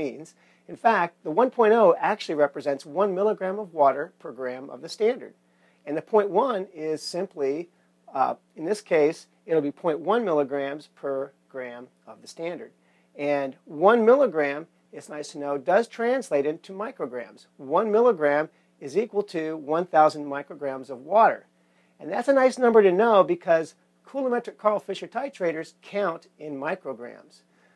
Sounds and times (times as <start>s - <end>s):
Speech: 0.0s - 27.5s.